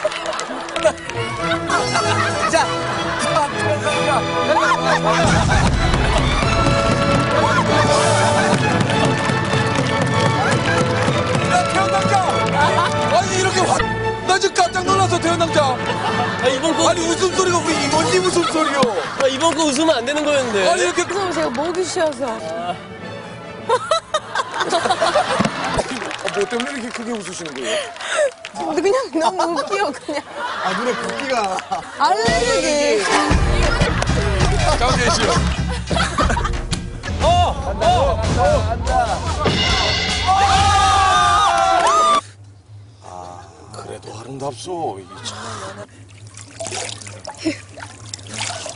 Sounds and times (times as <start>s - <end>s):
Music: 0.0s - 27.8s, 32.0s - 42.9s.